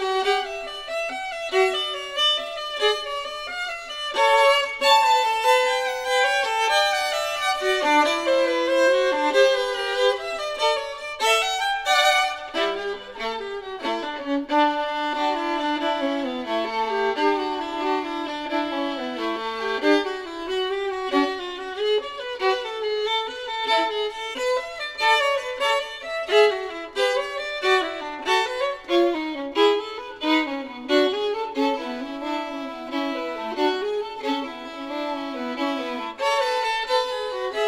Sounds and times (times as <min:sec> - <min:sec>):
Violin, fiddle: 0:00.0 - 0:37.6.